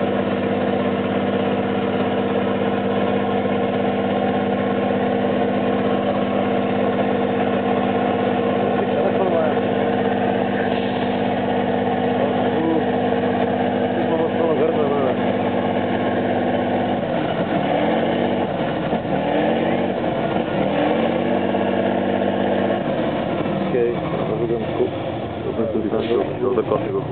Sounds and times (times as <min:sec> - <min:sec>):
Truck: 0:00.0 - 0:27.1
Speech: 0:08.7 - 0:09.6, 0:12.2 - 0:12.9, 0:14.0 - 0:15.2, 0:23.7 - 0:24.9, 0:25.5 - 0:27.1.